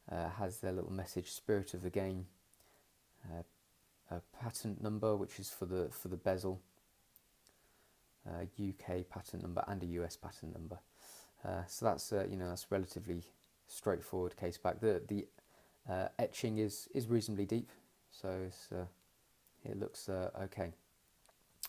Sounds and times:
Speech: 0.0 - 2.4, 3.2 - 6.7, 8.2 - 19.0, 19.6 - 20.8.

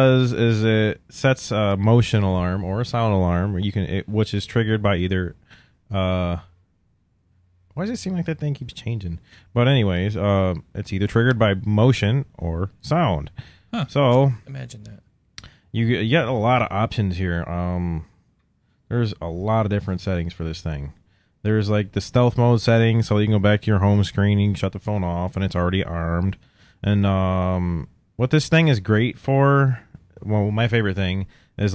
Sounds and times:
Speech: 0.0 - 6.6, 7.8 - 15.1, 15.8 - 18.2, 18.9 - 31.7.

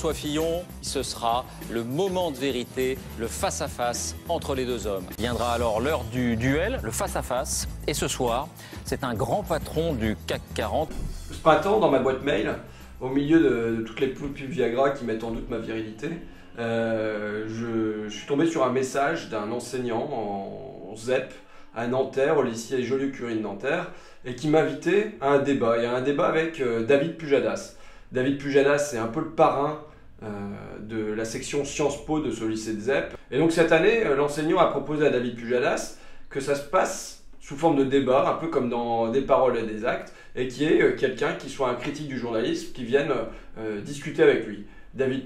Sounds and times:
Music: 0.0 - 45.2
Speech: 0.0 - 45.2.

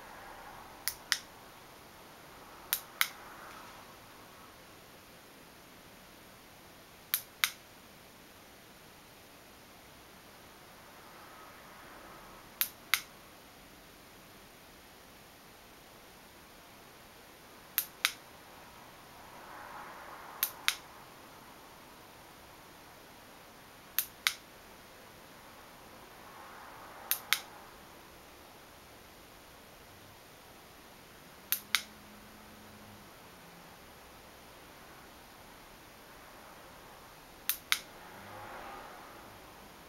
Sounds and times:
Vehicle: 0.0 - 6.1, 9.6 - 15.8, 16.4 - 39.8.

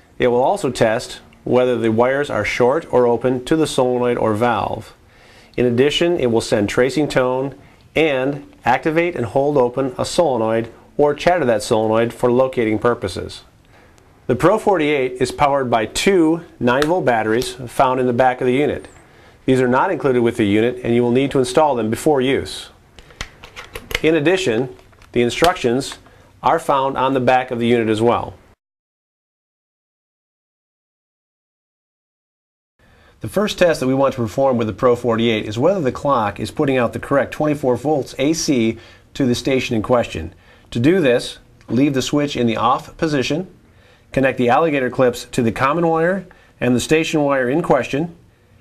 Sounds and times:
Speech: 0.2 - 5.0, 5.6 - 13.5, 14.3 - 18.9, 19.5 - 22.8, 24.0 - 28.4, 33.2 - 48.2.

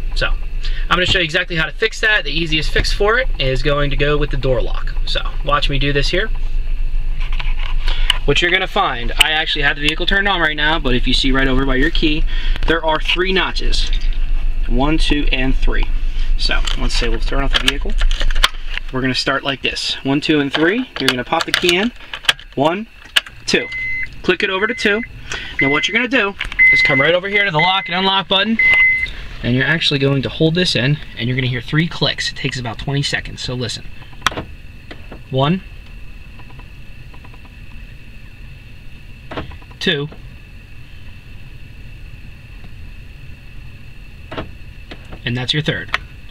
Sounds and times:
Speech: 0.2 - 6.3, 8.3 - 14.1, 14.7 - 18.0, 18.9 - 22.0, 22.6 - 22.9, 23.5 - 28.6, 29.4 - 33.9, 35.3 - 35.6, 39.8 - 40.2, 45.2 - 46.0.

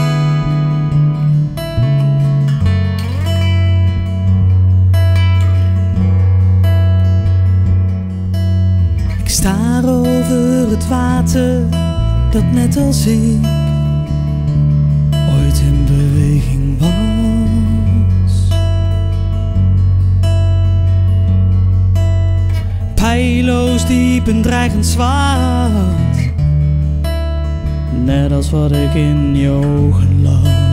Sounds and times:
Music: 0.0 - 30.7.

